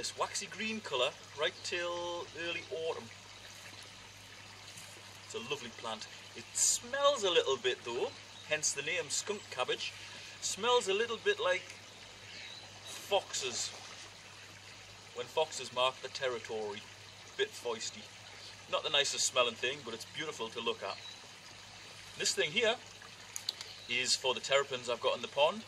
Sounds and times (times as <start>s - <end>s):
Speech: 0.0s - 3.1s, 5.3s - 11.7s, 13.0s - 13.8s, 15.2s - 18.1s, 18.7s - 21.0s, 22.2s - 22.8s, 23.9s - 25.6s.